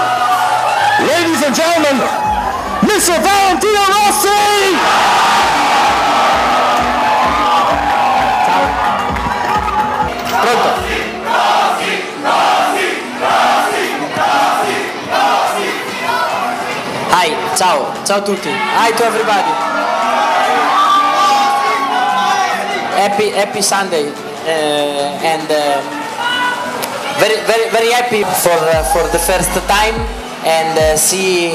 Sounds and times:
Inside, large room or hall: 0.0 - 31.5
Music: 0.0 - 31.5.

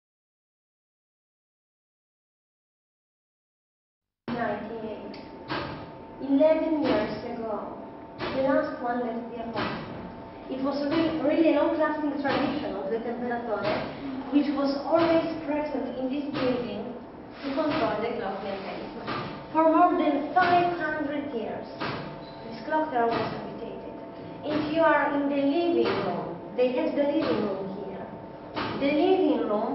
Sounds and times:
Speech: 4.3 - 5.2, 6.2 - 9.7, 10.5 - 21.8, 22.5 - 28.1, 28.8 - 29.7.

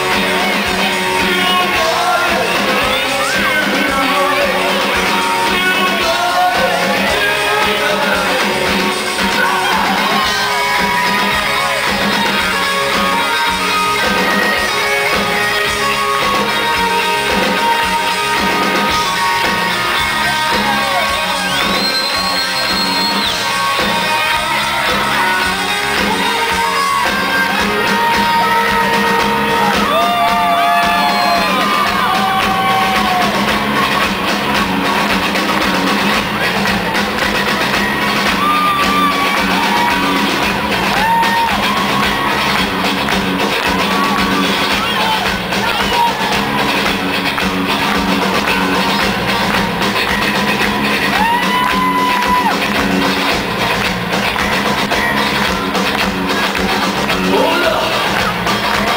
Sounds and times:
Music: 0.0 - 58.9.

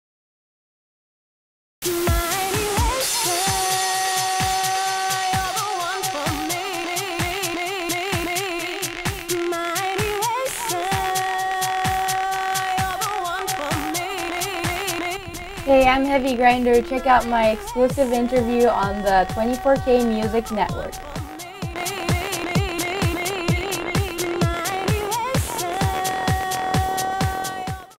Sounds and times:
Music: 1.8 - 27.9
Speech: 15.7 - 21.0.

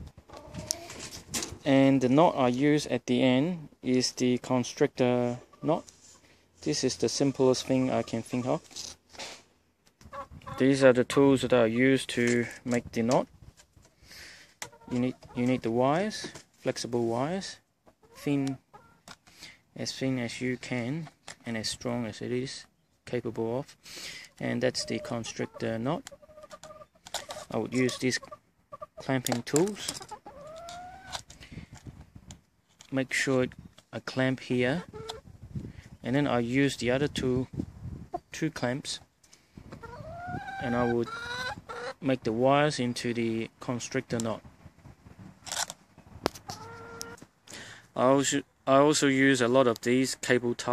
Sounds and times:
Chicken, rooster: 0.3 - 1.2, 10.1 - 10.6, 14.6 - 15.7, 24.8 - 29.0, 30.0 - 31.2, 39.7 - 42.0, 46.5 - 47.2
Speech: 1.6 - 5.9, 6.6 - 8.7, 10.6 - 13.3, 14.9 - 17.6, 18.2 - 18.6, 19.8 - 23.7, 24.4 - 26.1, 27.5 - 28.2, 29.0 - 30.0, 32.9 - 34.9, 36.0 - 37.5, 38.4 - 39.1, 40.6 - 41.1, 42.0 - 44.4, 48.0 - 50.7.

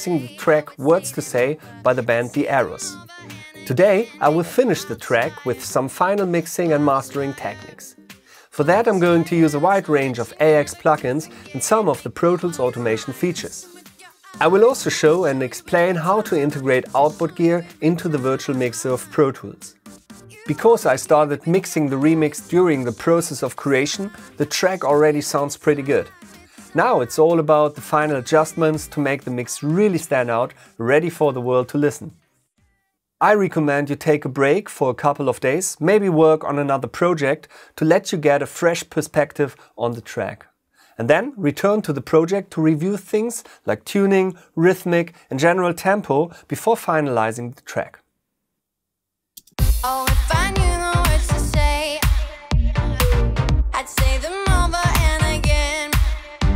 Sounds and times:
Speech: 0.0 - 3.0, 3.6 - 7.9, 8.5 - 13.8, 14.4 - 19.7, 20.3 - 32.2, 33.2 - 48.0
Music: 0.0 - 32.9, 49.5 - 56.5.

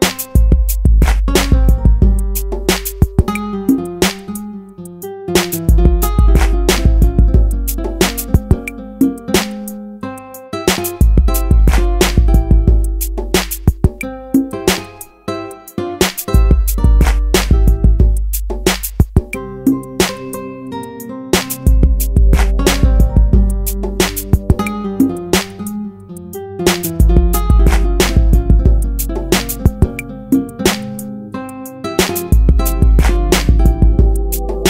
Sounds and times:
Electronic dance music: 19.4 - 24.9, 32.4 - 34.7
Ambient music: 19.4 - 26.4, 32.2 - 34.7.

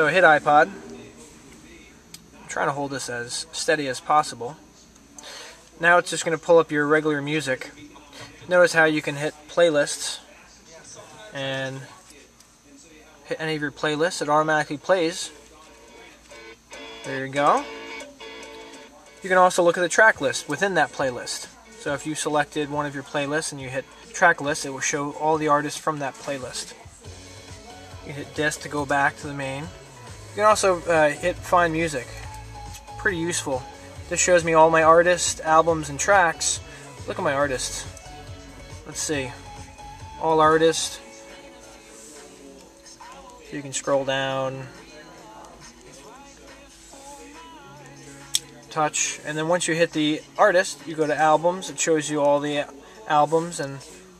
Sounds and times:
Speech: 0.0 - 16.2, 17.0 - 17.7, 19.0 - 26.8, 28.1 - 29.8, 30.4 - 32.2, 33.0 - 37.9, 38.8 - 39.5, 40.2 - 41.0, 43.4 - 44.7, 48.7 - 54.0
Music: 0.0 - 54.1.

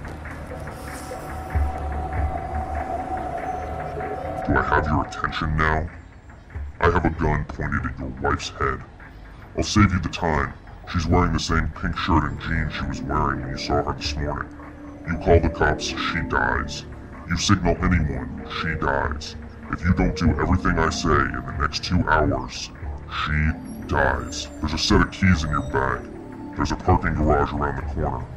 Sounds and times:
Speech: 4.4 - 6.0, 6.8 - 8.9, 9.6 - 14.5, 15.1 - 28.3.

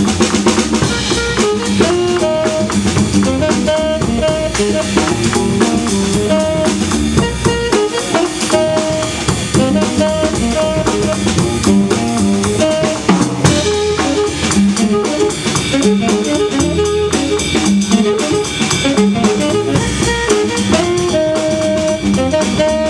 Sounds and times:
Jazz: 0.0 - 22.8.

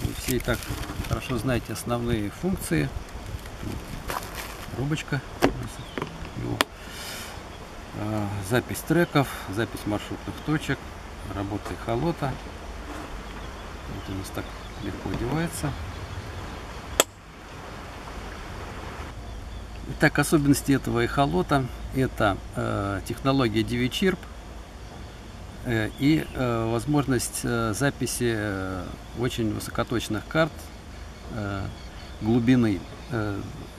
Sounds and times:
Speech: 0.0 - 3.0, 4.7 - 6.7, 8.0 - 12.4, 13.9 - 15.8, 19.9 - 24.3, 25.6 - 30.7, 31.3 - 33.7
Chirp, tweet: 13.2 - 16.6, 30.6 - 33.7.

